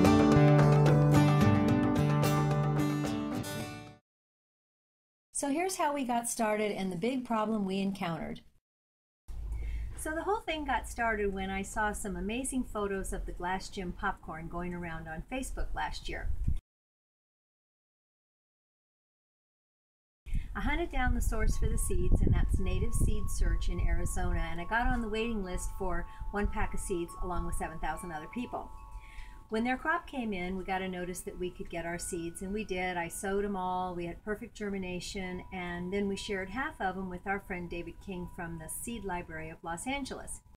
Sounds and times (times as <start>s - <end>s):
Music: 0.0s - 4.0s, 21.5s - 40.4s
Speech: 5.4s - 8.5s, 10.0s - 16.3s, 20.6s - 28.7s, 29.5s - 40.5s.